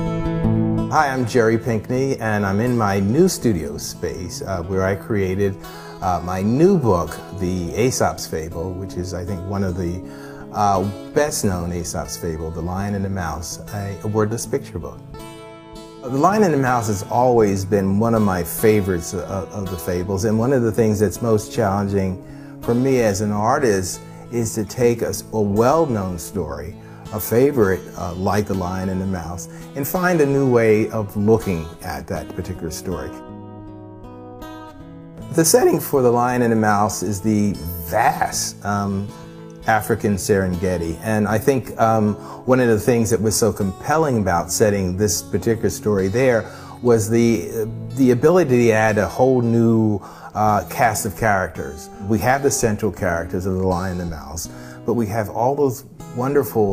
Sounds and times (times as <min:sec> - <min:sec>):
Music: 0:00.0 - 0:56.7
Speech: 0:00.9 - 0:15.0, 0:16.0 - 0:33.2, 0:35.3 - 0:56.7.